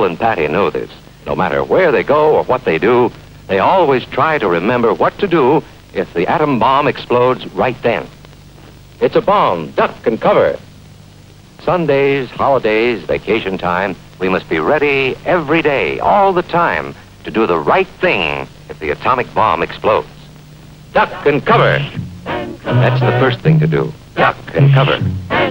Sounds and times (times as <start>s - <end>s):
Speech: 0.0s - 8.2s, 9.0s - 10.7s, 11.6s - 20.3s, 20.9s - 22.0s, 22.7s - 25.1s
Music: 21.0s - 25.5s.